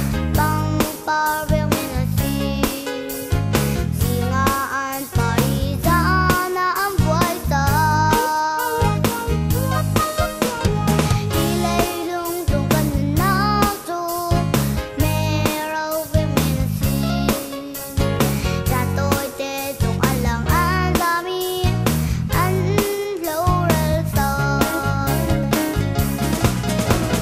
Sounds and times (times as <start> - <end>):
Music: 0.0 - 27.2.